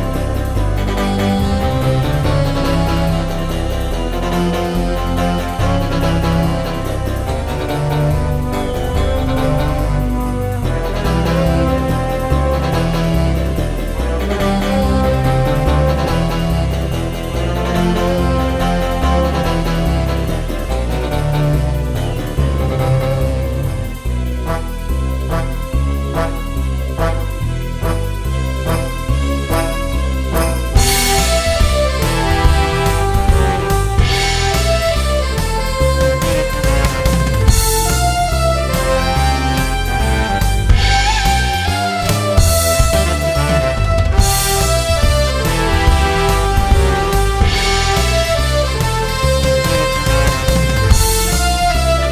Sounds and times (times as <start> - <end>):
Jingle (music): 0.0 - 52.1.